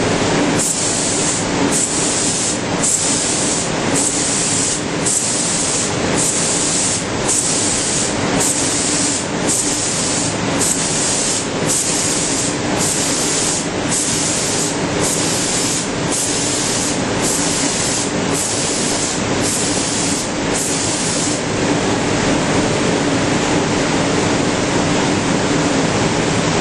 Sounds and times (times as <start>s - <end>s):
Spray: 0.6s - 21.5s.